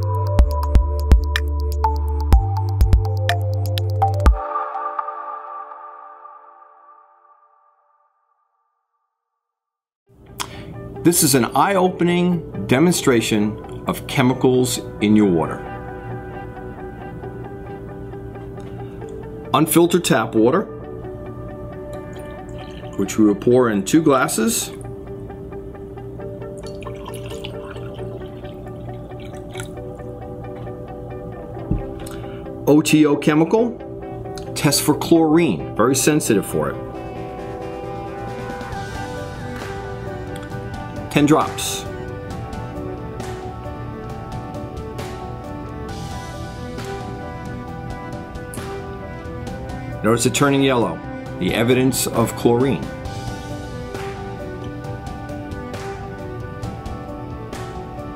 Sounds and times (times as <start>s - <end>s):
Music: 0.0s - 8.0s, 10.1s - 58.1s
Speech: 11.1s - 15.6s, 19.6s - 20.7s, 23.0s - 24.8s, 32.7s - 33.8s, 34.6s - 36.8s, 41.1s - 41.9s, 50.0s - 52.9s.